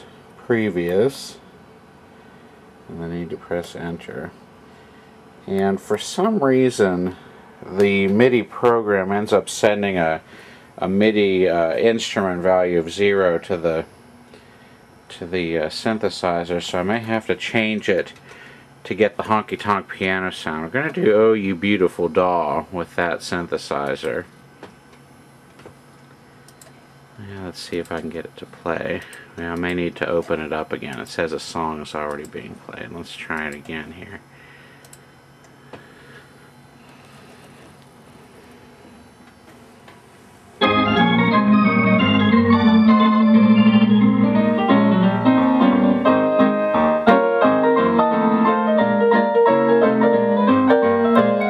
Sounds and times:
Electronic organ: 40.6 - 51.5.

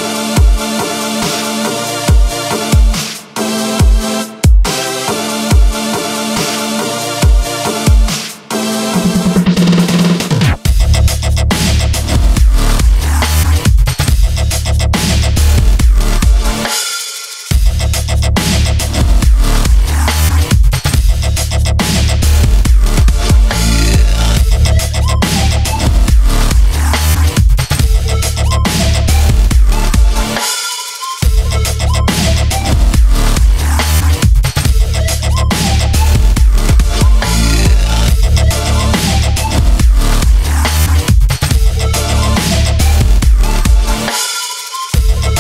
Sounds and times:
Dubstep: 0.0 - 45.4.

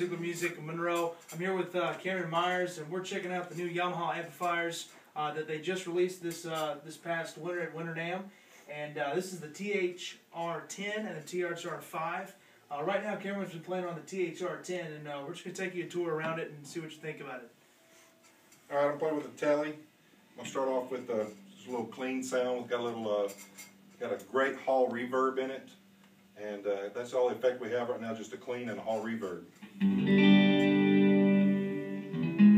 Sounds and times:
Speech: 0.0 - 17.5, 18.7 - 19.8, 20.4 - 25.8, 26.4 - 29.5.

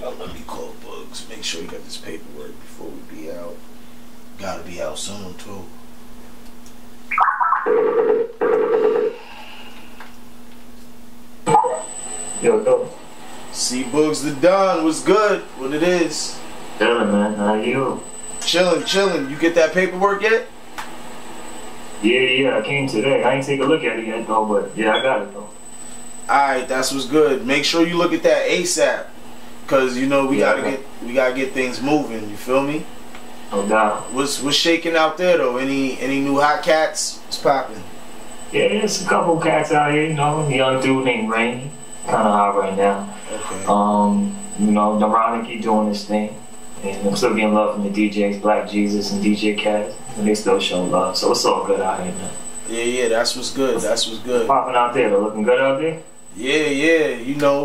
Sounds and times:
Speech: 0.0 - 3.6, 4.4 - 5.7, 12.4 - 20.5, 22.0 - 25.5, 26.3 - 29.1, 29.7 - 32.9, 33.5 - 37.9, 38.6 - 57.6.

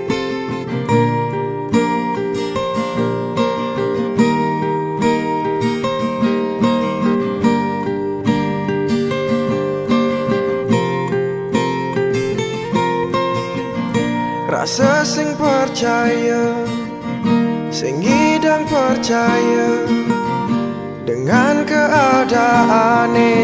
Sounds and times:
Music: 0.0 - 23.4.

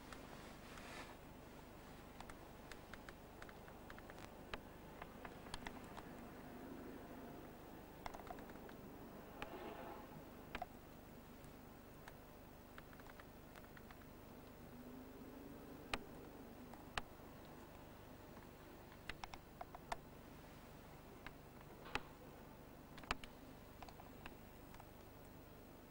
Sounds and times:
Silence: 0.0 - 25.9
Outside, urban or manmade: 1.2 - 25.9.

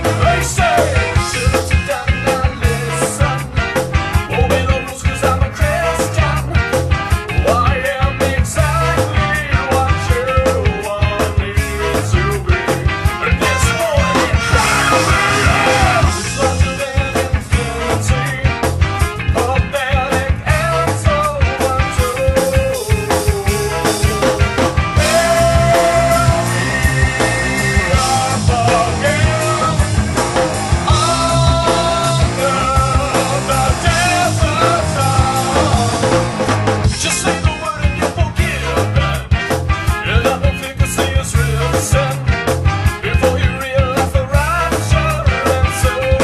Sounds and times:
Music: 0.0 - 46.2.

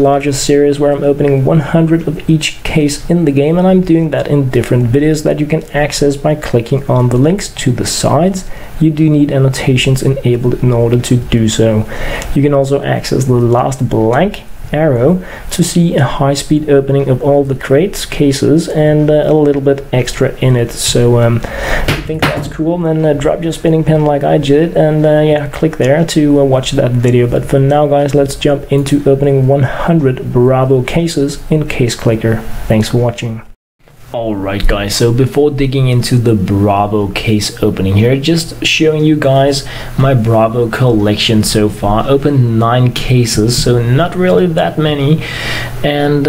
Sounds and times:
Speech: 0.0 - 45.2, 45.8 - 46.2.

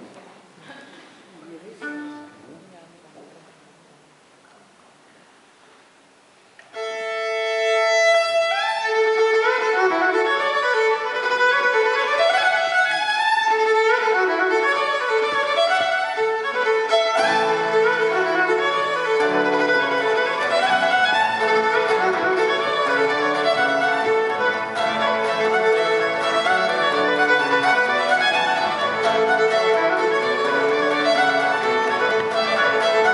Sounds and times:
Violin, fiddle: 1.5 - 2.6, 6.6 - 33.1.

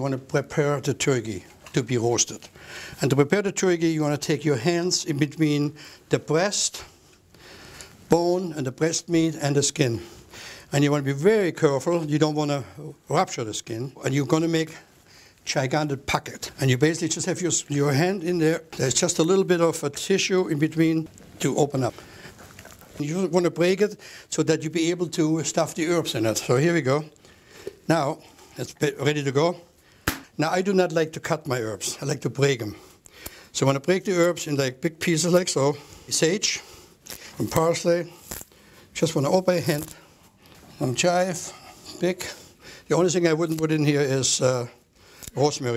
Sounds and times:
Speech: 0.0 - 7.0, 8.1 - 10.1, 10.7 - 22.0, 23.0 - 27.2, 27.9 - 29.7, 30.4 - 32.9, 33.5 - 36.7, 37.4 - 38.2, 39.0 - 40.0, 40.7 - 44.8, 45.4 - 45.7.

